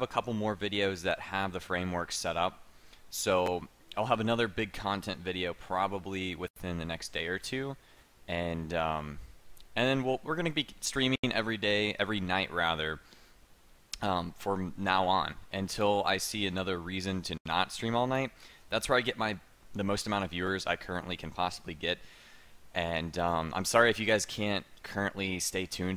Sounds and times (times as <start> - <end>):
Speech: 0.0 - 13.0, 14.0 - 22.0, 22.8 - 25.9.